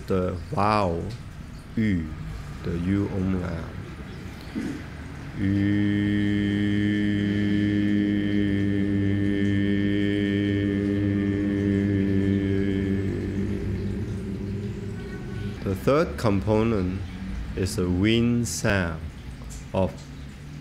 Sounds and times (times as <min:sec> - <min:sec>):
Speech: 0:00.0 - 0:01.2, 0:01.8 - 0:03.8, 0:15.4 - 0:19.1, 0:19.8 - 0:20.0.